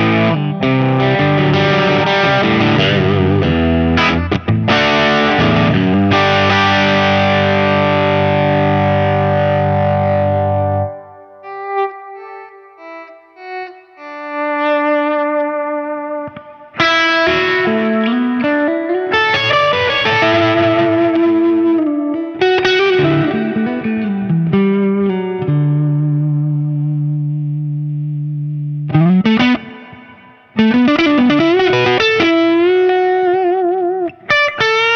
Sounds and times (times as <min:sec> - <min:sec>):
Guitar: 0:00.0 - 0:34.9.